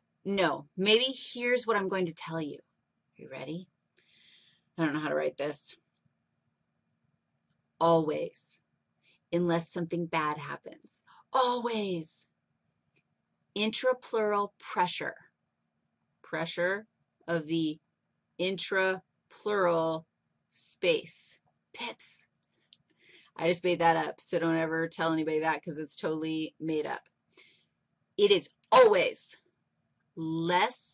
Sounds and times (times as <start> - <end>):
Speech: 0.3 - 2.6, 3.2 - 3.7, 4.8 - 5.8, 7.8 - 8.6, 9.4 - 12.3, 13.6 - 15.2, 16.3 - 17.8, 18.4 - 20.0, 20.6 - 22.3, 23.4 - 27.0, 28.2 - 29.4, 30.2 - 30.9.